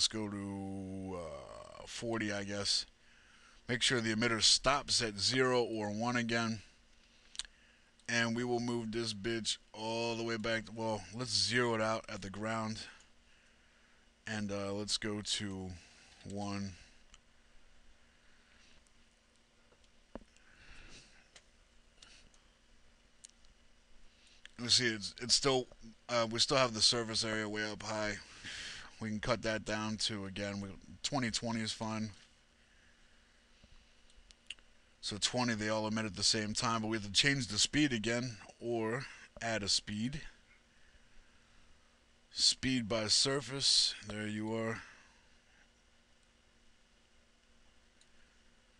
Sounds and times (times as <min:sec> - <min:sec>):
Speech: 0:00.0 - 0:02.9, 0:03.7 - 0:06.7, 0:08.1 - 0:13.0, 0:14.3 - 0:16.9, 0:24.6 - 0:28.3, 0:28.9 - 0:32.2, 0:35.0 - 0:40.4, 0:42.4 - 0:45.0.